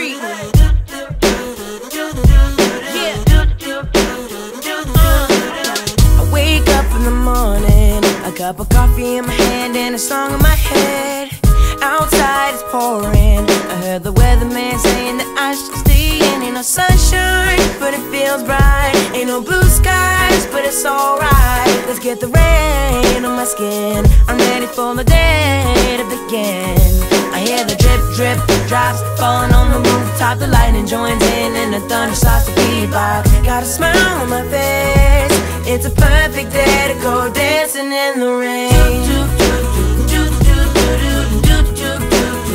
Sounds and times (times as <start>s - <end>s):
Music: 0.0s - 42.5s.